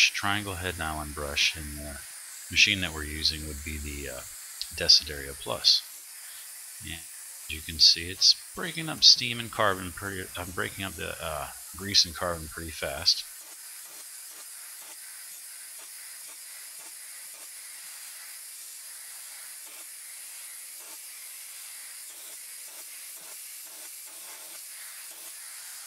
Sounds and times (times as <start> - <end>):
Hiss: 0.0 - 25.8.